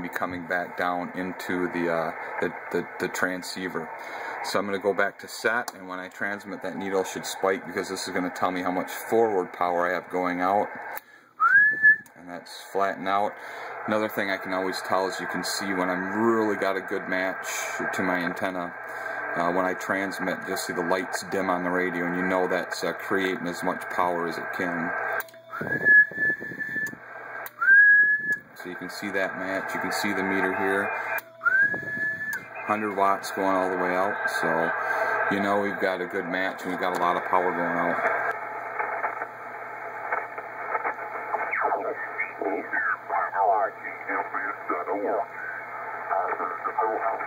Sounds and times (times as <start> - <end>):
Speech: 0.0 - 10.7, 12.1 - 25.0, 28.6 - 31.0, 32.5 - 38.2, 41.5 - 47.2
Radio: 0.0 - 11.0, 12.1 - 47.2.